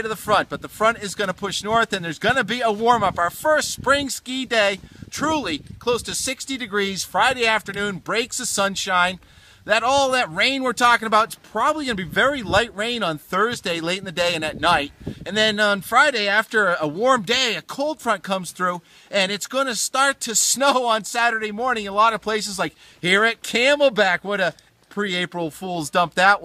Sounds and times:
Speech: 0.0 - 26.4.

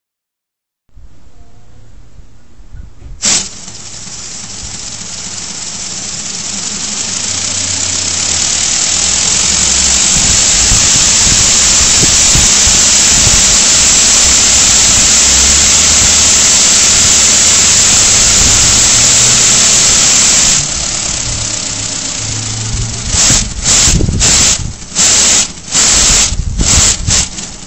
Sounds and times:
Engine: 3.2 - 27.6.

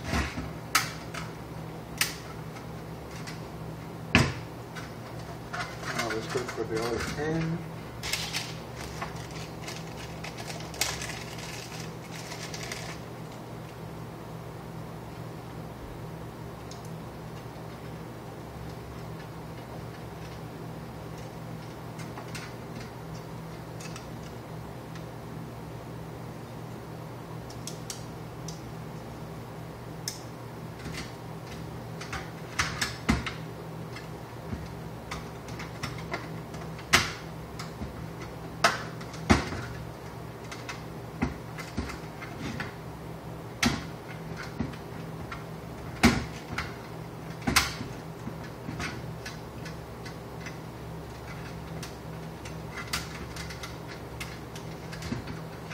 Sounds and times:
Inside, small room: 0.0 - 55.7.

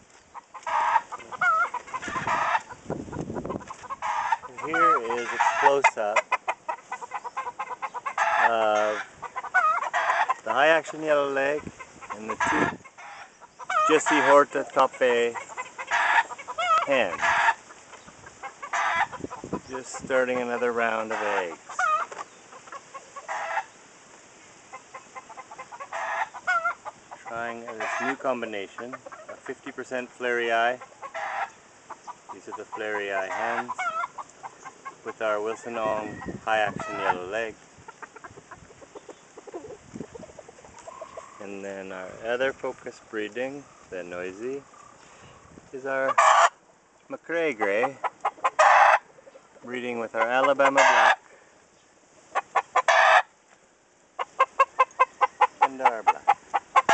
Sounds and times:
Chicken, rooster: 0.3 - 23.8, 24.7 - 42.5, 43.6 - 46.6, 47.6 - 51.3, 52.3 - 53.3, 54.2 - 56.9
Bird: 3.4 - 23.8, 38.0 - 46.2.

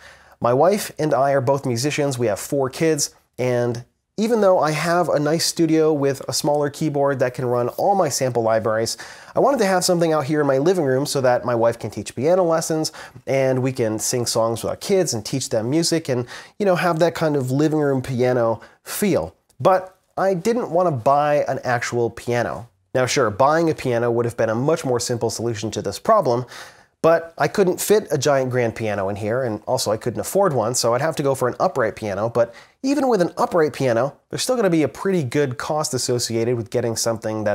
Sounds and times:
Speech: 0.0 - 37.5.

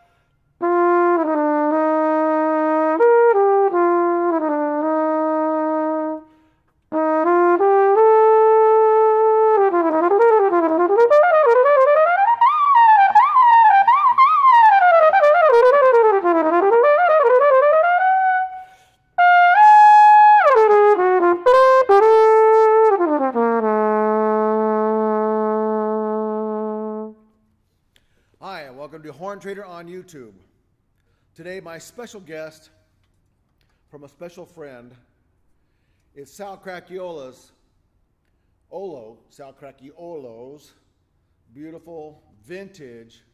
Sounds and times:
Trumpet: 0.0 - 27.5.

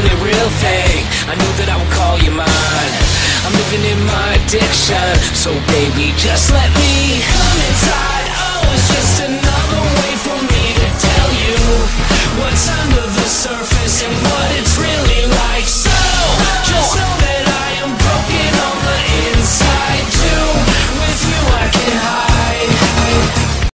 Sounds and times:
Music: 0.0 - 23.7.

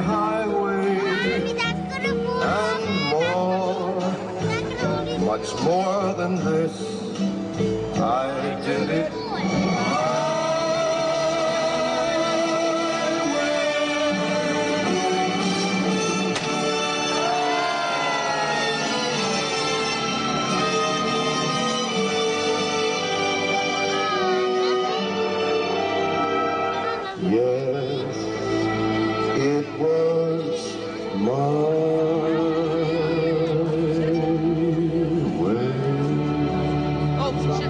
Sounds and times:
Male singing: 0.0 - 1.4, 2.4 - 4.3, 5.0 - 7.2, 7.9 - 15.0, 27.2 - 28.5, 29.2 - 37.7
Music: 0.0 - 37.7.

